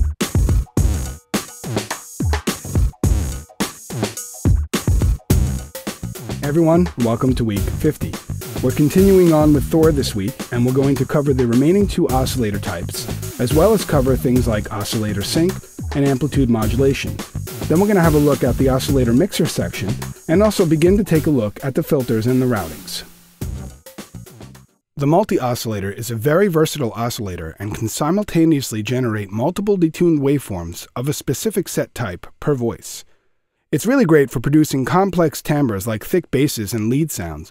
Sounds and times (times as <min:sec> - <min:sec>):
Speech: 0:06.4 - 0:23.1, 0:25.0 - 0:33.1, 0:33.8 - 0:37.5.